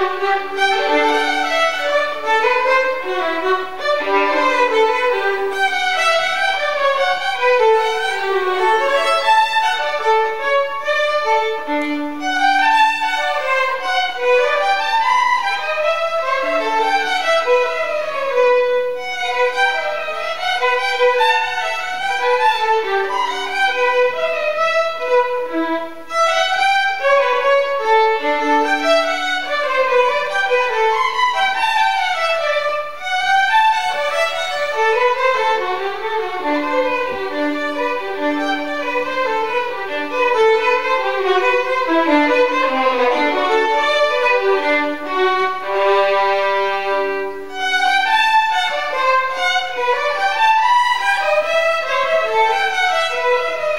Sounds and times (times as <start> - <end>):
Violin, fiddle: 0.0 - 53.7.